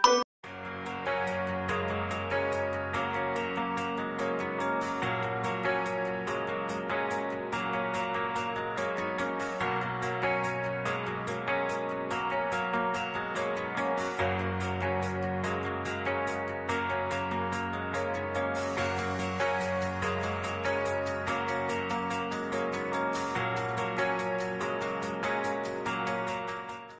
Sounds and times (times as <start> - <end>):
Music: 0.0 - 27.0.